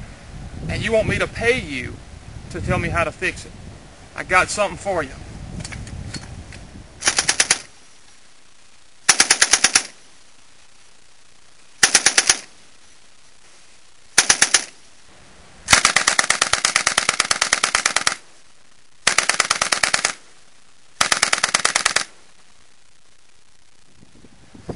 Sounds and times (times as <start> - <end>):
Speech: 0.7 - 3.5, 4.2 - 5.2.